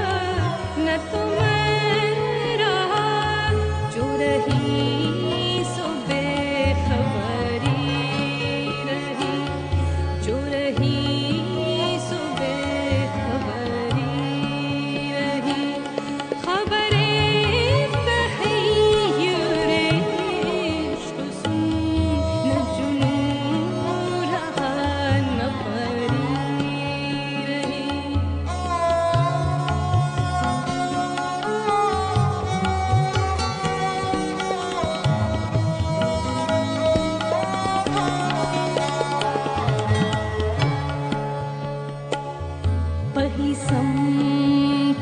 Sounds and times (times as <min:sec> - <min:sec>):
Carnatic music: 0:00.0 - 0:45.0.